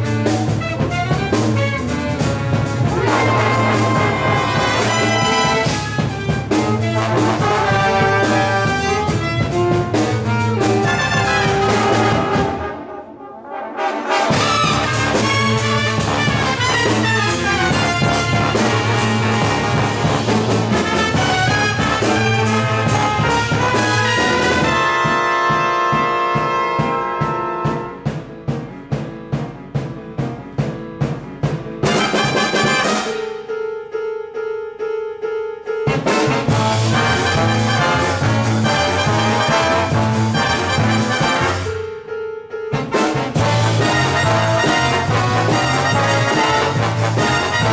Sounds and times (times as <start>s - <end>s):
Double bass: 0.0s - 12.7s, 14.3s - 32.8s, 35.9s - 42.0s, 42.8s - 47.7s
Classical music: 0.0s - 47.7s.